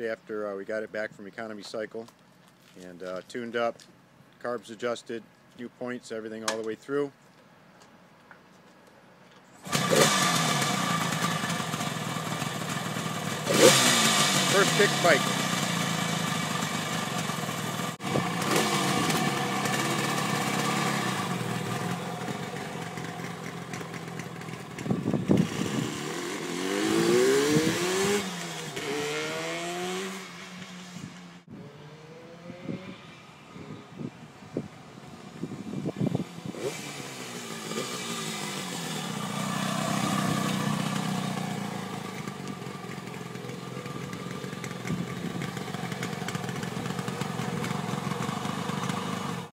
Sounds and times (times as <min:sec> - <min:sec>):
Outside, urban or manmade: 0:00.0 - 0:49.5
Motorcycle: 0:09.4 - 0:49.5.